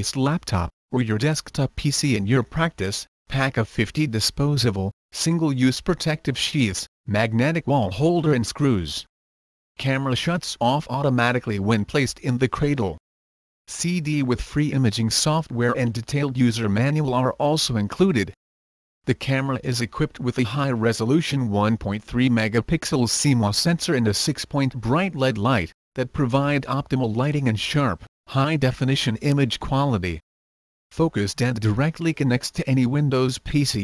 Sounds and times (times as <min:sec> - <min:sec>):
Speech: 0:00.0 - 0:09.1, 0:09.8 - 0:13.0, 0:13.7 - 0:18.4, 0:19.1 - 0:30.2, 0:30.9 - 0:33.8.